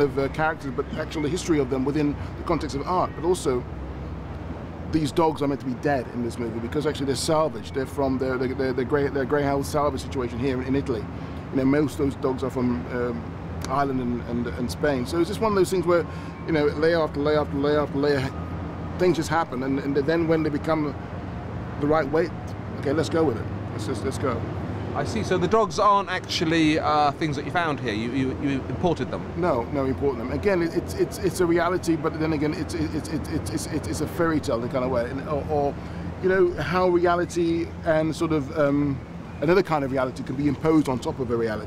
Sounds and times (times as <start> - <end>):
Speech: 0.0 - 3.6, 4.9 - 18.3, 19.0 - 21.0, 21.8 - 24.4, 25.0 - 41.6
Outside, urban or manmade: 0.0 - 41.6.